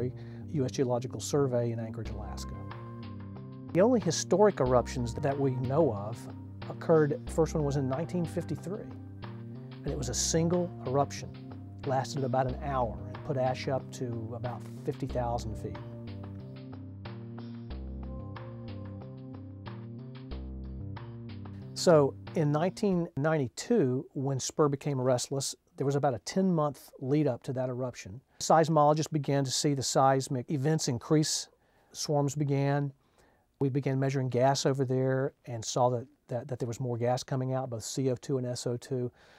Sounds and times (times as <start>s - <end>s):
Speech: 0.0s - 2.6s, 3.8s - 8.9s, 9.8s - 15.8s, 21.8s - 33.0s, 33.6s - 39.2s
Music: 0.0s - 23.2s.